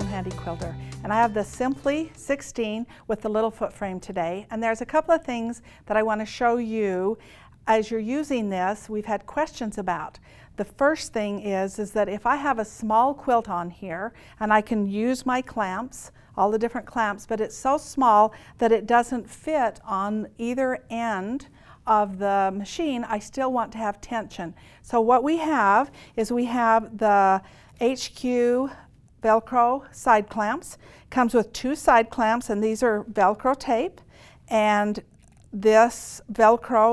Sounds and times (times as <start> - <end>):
Speech: 0.0 - 35.0, 35.6 - 36.9.